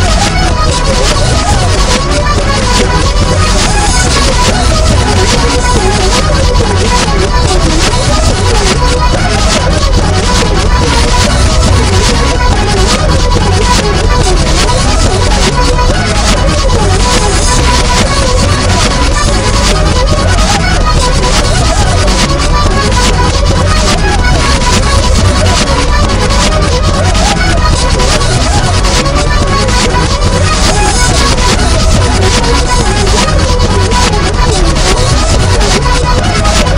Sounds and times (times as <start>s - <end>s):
Music: 0.0s - 36.7s.